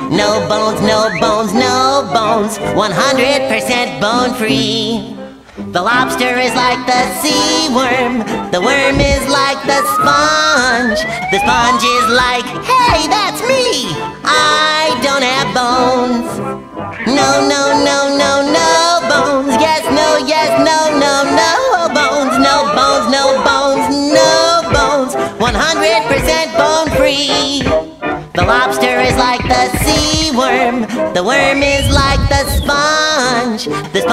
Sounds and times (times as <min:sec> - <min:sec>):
Theme music: 0:06.0 - 0:27.5.